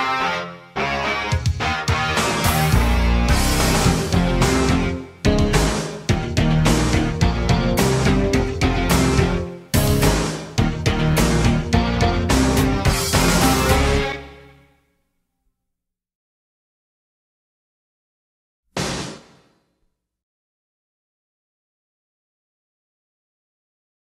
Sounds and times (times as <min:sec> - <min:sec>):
Music: 0:00.0 - 0:15.8.